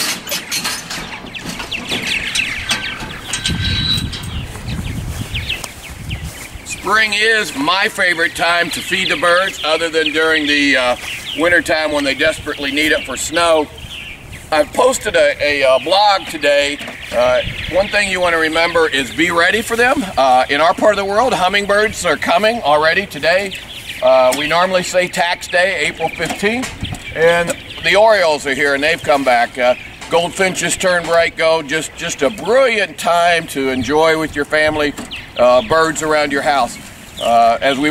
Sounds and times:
Bird: 0:00.0 - 0:37.9
Speech: 0:06.7 - 0:13.7, 0:14.5 - 0:37.9.

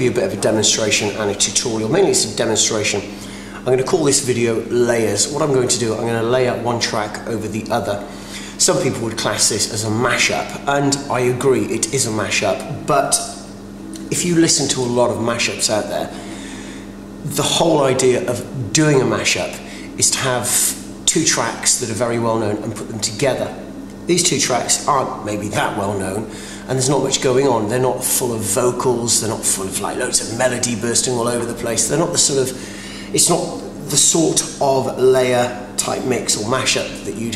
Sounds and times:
Speech: 0:00.0 - 0:13.4, 0:14.0 - 0:16.2, 0:17.2 - 0:37.3.

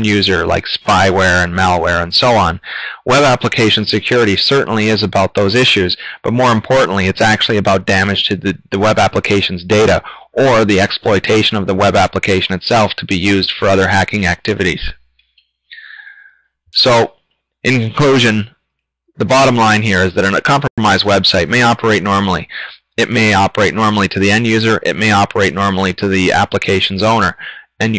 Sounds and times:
Speech: 0:00.0 - 0:15.0, 0:15.8 - 0:16.2, 0:16.8 - 0:18.5, 0:19.2 - 0:27.9
Inside, small room: 0:00.0 - 0:27.9.

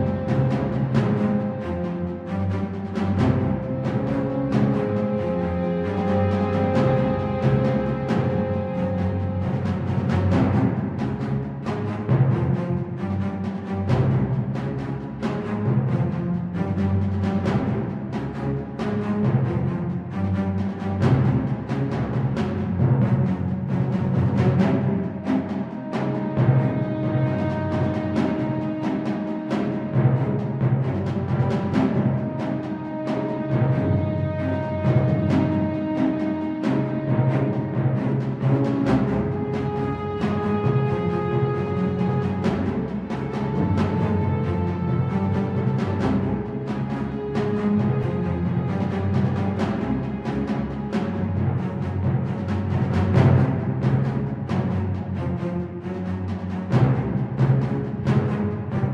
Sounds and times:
Soundtrack music: 0:00.0 - 0:21.0, 0:23.7 - 0:58.9.

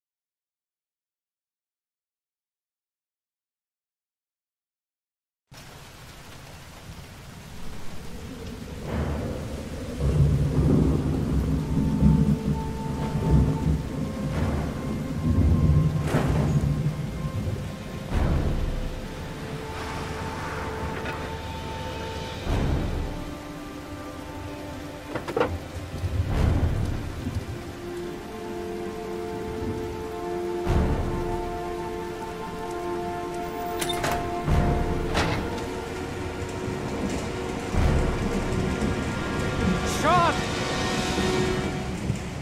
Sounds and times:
Rain on surface: 0:05.5 - 0:42.4
Raindrop: 0:05.5 - 0:42.4
Music: 0:07.6 - 0:42.4.

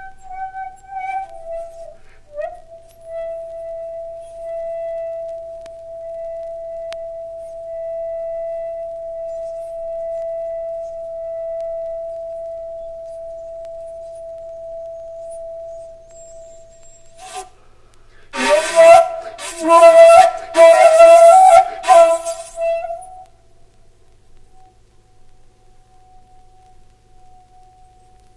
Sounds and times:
Flute: 0:00.0 - 0:17.7, 0:18.3 - 0:23.8, 0:24.4 - 0:28.3.

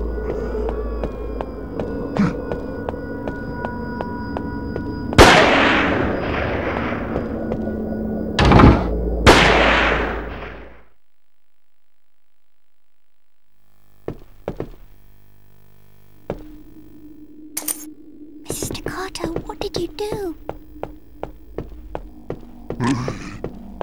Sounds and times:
Speech: 0:18.5 - 0:20.4.

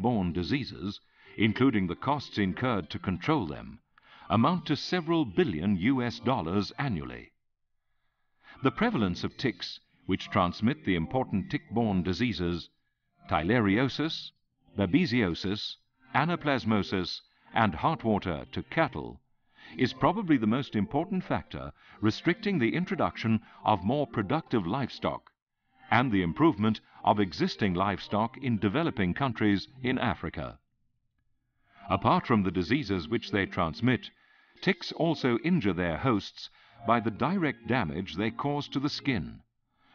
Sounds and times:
Speech: 0:00.0 - 0:07.3, 0:08.5 - 0:12.7, 0:13.3 - 0:25.3, 0:25.9 - 0:30.6, 0:31.8 - 0:39.4.

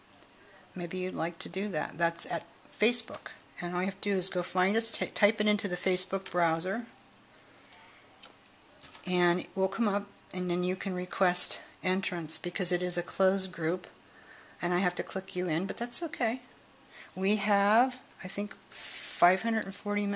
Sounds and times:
Inside, small room: 0:00.0 - 0:20.1
Speech: 0:00.4 - 0:06.9, 0:09.0 - 0:14.0, 0:14.6 - 0:16.5, 0:17.2 - 0:20.1.

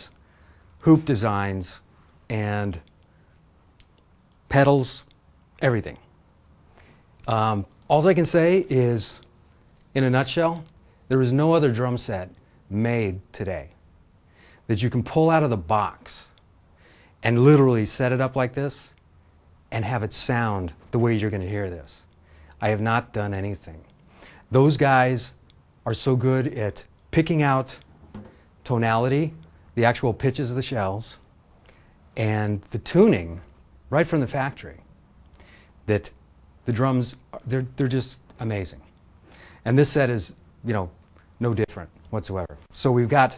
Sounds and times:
Speech: 0:00.8 - 0:02.9, 0:04.5 - 0:06.1, 0:07.3 - 0:09.3, 0:09.9 - 0:13.8, 0:14.7 - 0:16.4, 0:17.2 - 0:19.0, 0:19.7 - 0:23.9, 0:24.5 - 0:27.9, 0:28.6 - 0:31.2, 0:32.2 - 0:34.9, 0:35.8 - 0:38.9, 0:39.6 - 0:43.3.

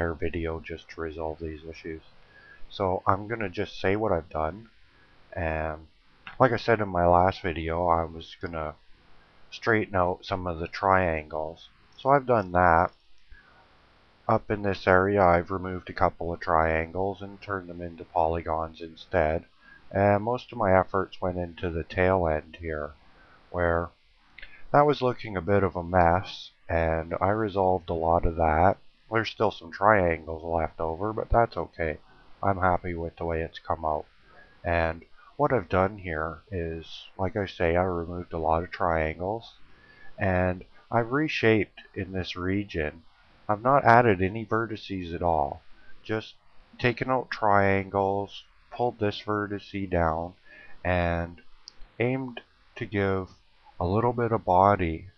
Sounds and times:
Speech: 0:00.0 - 0:02.1, 0:02.7 - 0:04.7, 0:05.4 - 0:08.8, 0:09.5 - 0:13.0, 0:14.3 - 0:23.0, 0:23.6 - 0:51.4, 0:52.0 - 0:55.1.

